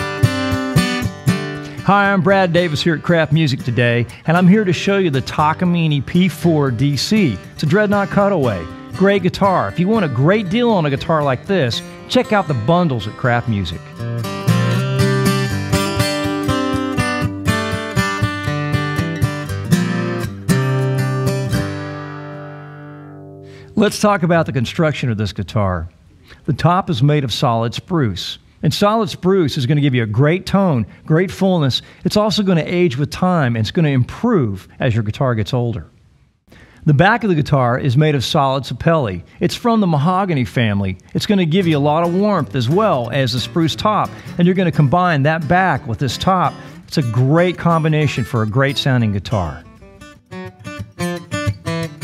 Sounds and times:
Music: 0.0 - 24.1, 41.5 - 52.0
Speech: 1.8 - 13.9, 23.8 - 35.9, 36.8 - 49.7.

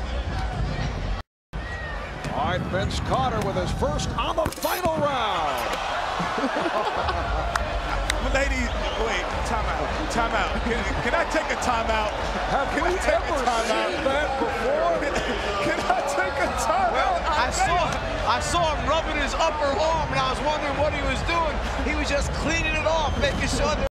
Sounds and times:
Speech: 8.0 - 23.9.

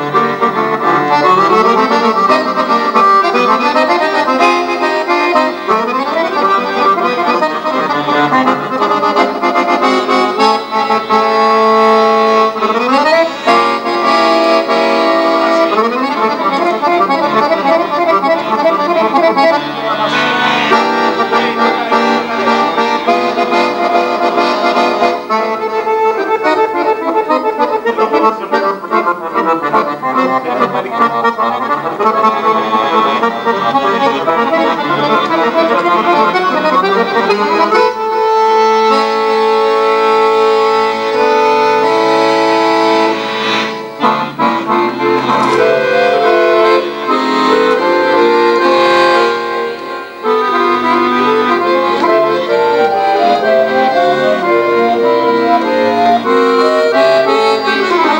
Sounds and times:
Accordion: 0.0 - 58.1.

